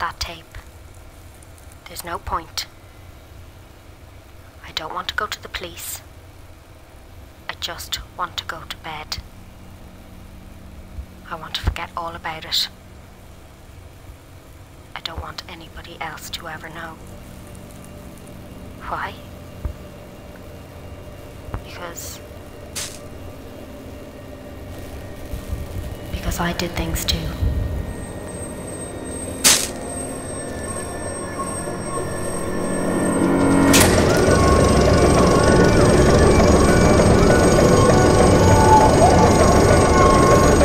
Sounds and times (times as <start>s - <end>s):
Speech: 0.0s - 0.6s, 1.9s - 2.7s, 4.6s - 6.1s, 7.5s - 9.2s, 11.3s - 12.8s, 15.0s - 17.0s, 21.6s - 22.2s, 26.1s - 27.5s
Music: 17.0s - 40.6s.